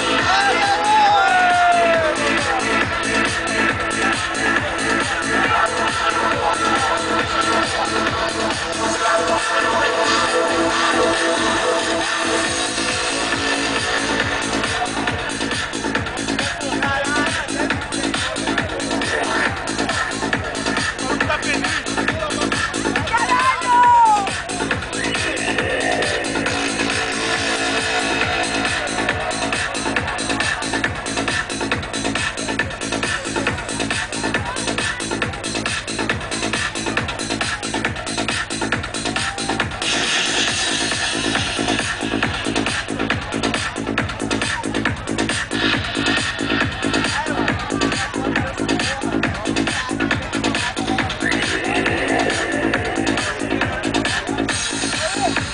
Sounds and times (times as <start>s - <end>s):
Music: 0.0s - 55.5s.